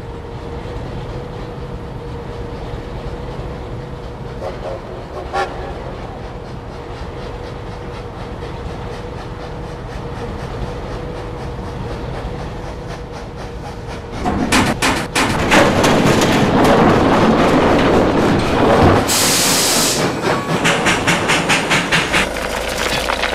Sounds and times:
Train: 0.0s - 23.3s.

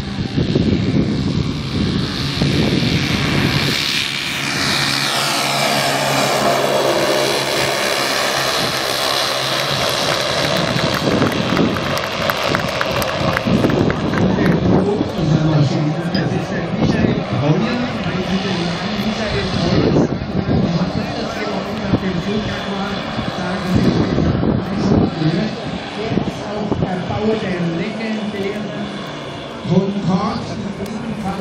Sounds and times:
Vehicle: 0.0s - 31.4s
Speech: 14.2s - 28.8s, 29.7s - 31.4s.

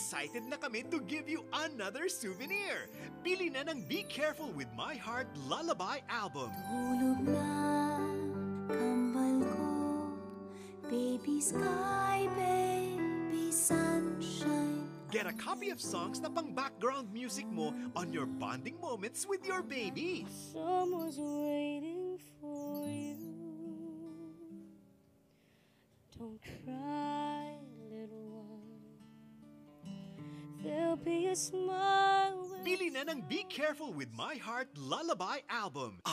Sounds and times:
Speech: 0.0s - 6.6s, 15.1s - 21.1s, 32.5s - 36.1s
Lullaby: 0.0s - 25.0s, 26.1s - 33.9s.

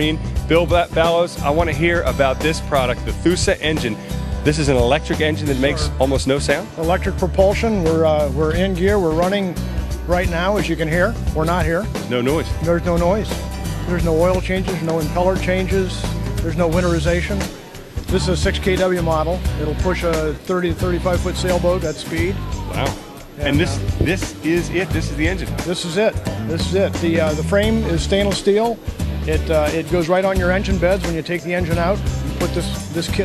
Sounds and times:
Speech: 0.0s - 13.3s, 13.9s - 17.5s, 18.1s - 33.2s
Music: 0.0s - 33.2s.

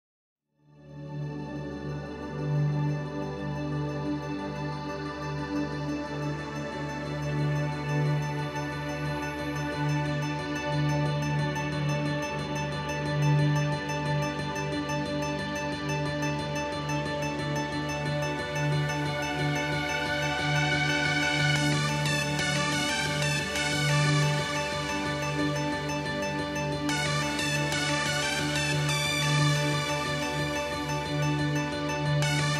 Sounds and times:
New-age music: 0.9s - 32.5s.

